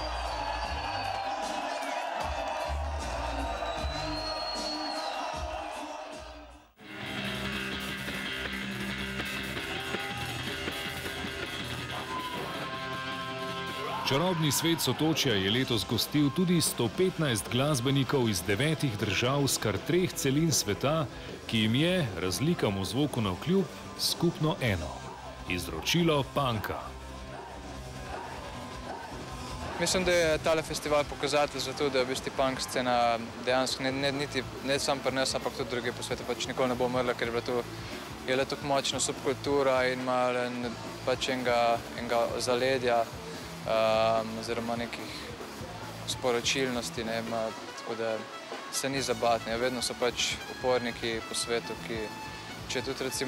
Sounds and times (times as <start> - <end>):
Speech: 14.0 - 26.9, 29.8 - 37.6, 38.2 - 43.1, 43.7 - 45.1, 46.1 - 52.1, 52.7 - 53.2.